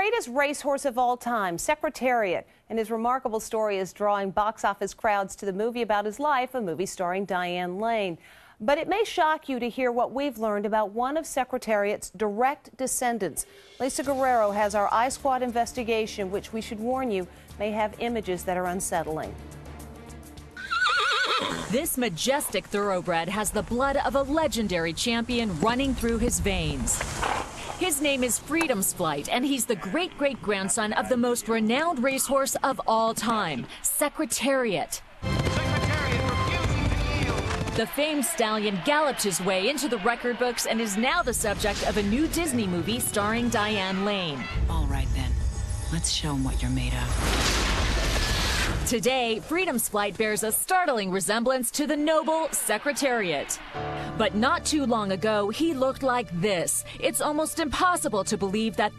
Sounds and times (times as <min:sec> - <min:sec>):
Music: 0:13.4 - 0:20.8, 0:35.2 - 0:47.1, 0:53.5 - 0:58.9.